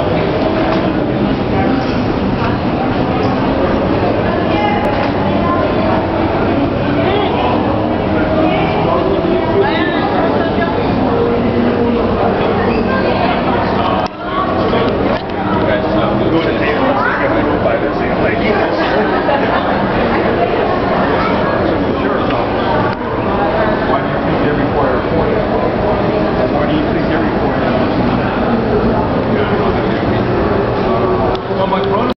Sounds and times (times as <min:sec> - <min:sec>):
Speech: 0:00.0 - 0:32.1.